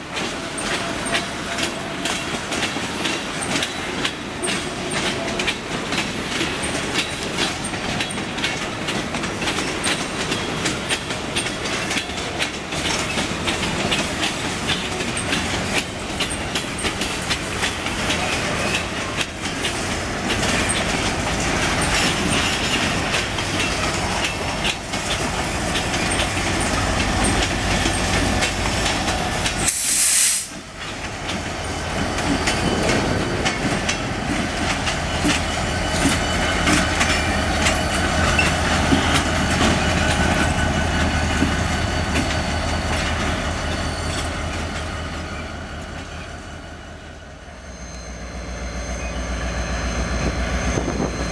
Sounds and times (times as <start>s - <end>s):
Hiss: 29.6s - 30.6s.